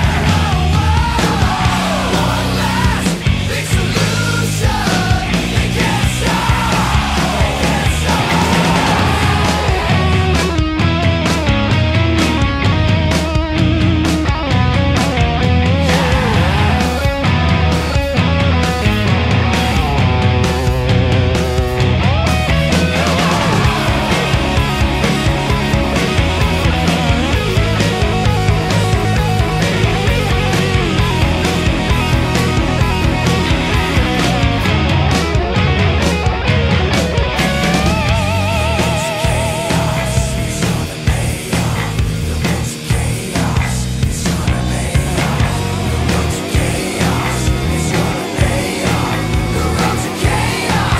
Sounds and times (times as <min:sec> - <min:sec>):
Progressive rock: 0:00.0 - 0:50.9.